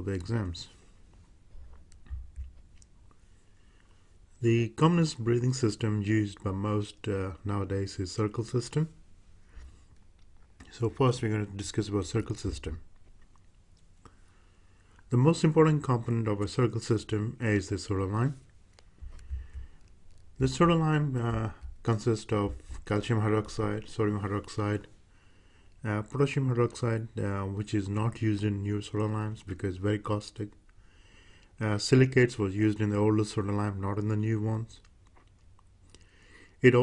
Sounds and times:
Speech: 0.0 - 0.8, 4.4 - 9.0, 10.6 - 12.9, 15.1 - 18.5, 20.4 - 24.9, 25.8 - 30.6, 31.6 - 34.9, 36.6 - 36.8.

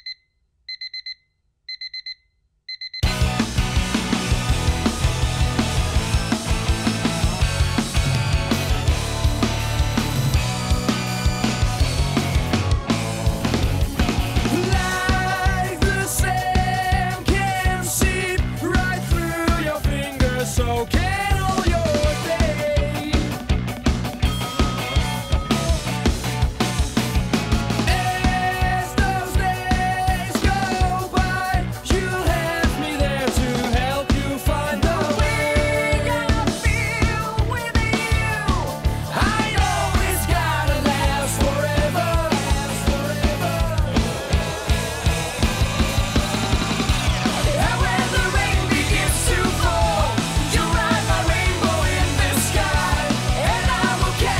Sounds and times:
Music: 3.0 - 54.3.

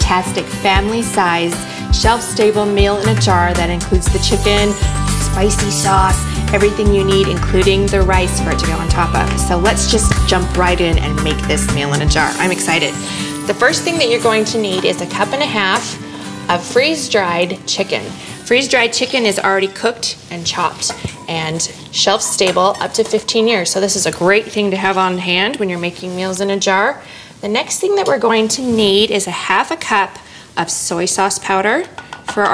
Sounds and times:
Music: 0.0 - 24.4
Speech: 0.0 - 32.5.

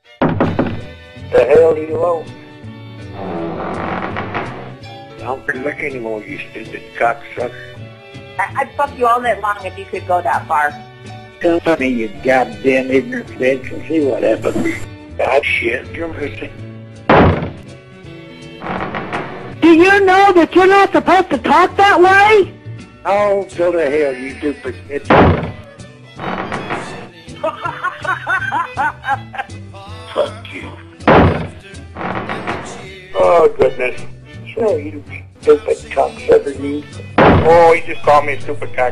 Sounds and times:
Music: 0.0 - 38.9
Conversation: 0.4 - 38.9.

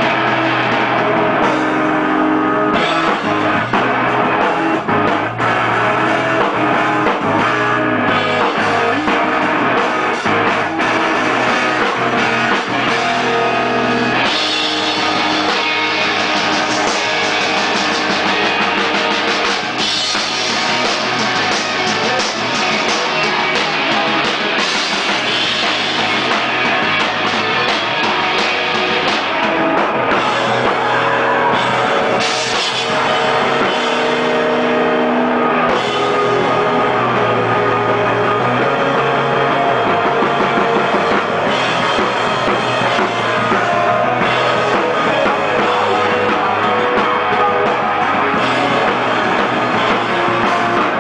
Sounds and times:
Music: 0.0 - 51.0.

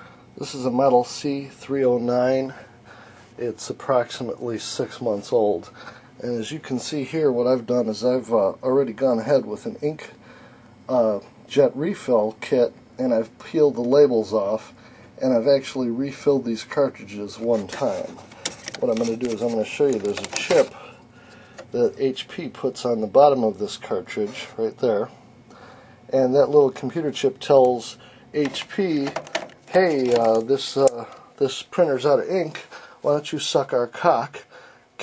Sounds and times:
Speech: 0.4 - 2.7, 3.4 - 10.2, 10.9 - 18.2, 18.8 - 20.8, 21.7 - 25.2, 26.1 - 35.0.

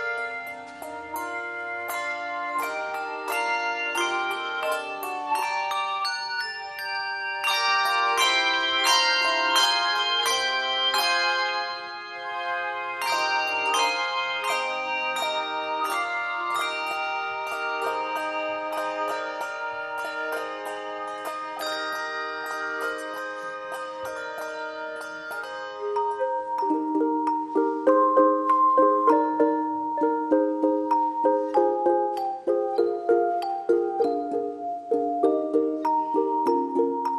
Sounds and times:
Music: 0.0 - 37.1.

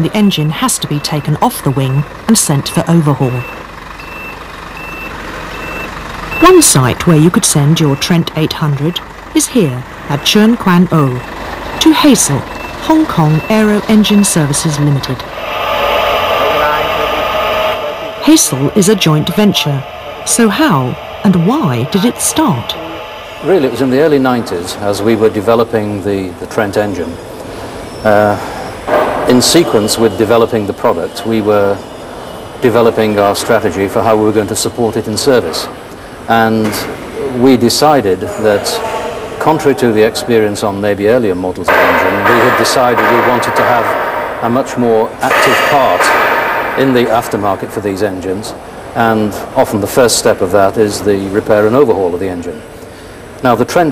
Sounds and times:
Speech: 0.0 - 3.5, 6.4 - 11.2, 11.8 - 15.3, 16.4 - 17.2, 18.2 - 27.2, 29.3 - 31.8, 32.6 - 46.2, 46.8 - 52.6, 53.4 - 53.9.

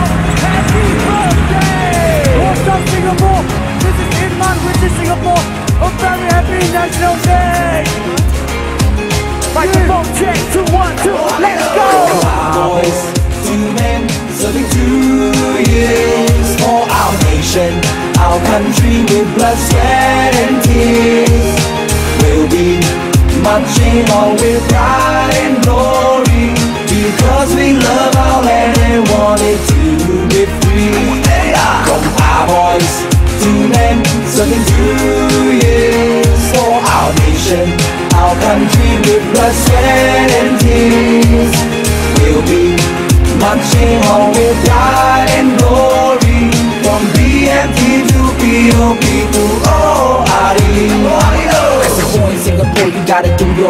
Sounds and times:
Male singing: 0.0 - 8.0, 9.6 - 53.6
Music: 0.0 - 53.6.

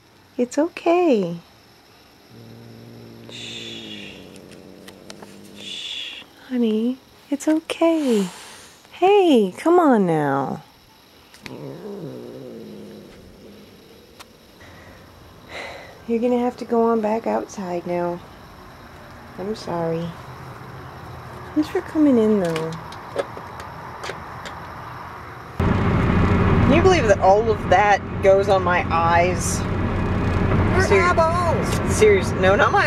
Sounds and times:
Speech: 0.4 - 1.4, 6.4 - 8.3, 9.0 - 10.6, 16.1 - 18.2, 19.4 - 20.2, 21.6 - 22.8, 26.7 - 29.6, 30.7 - 32.8.

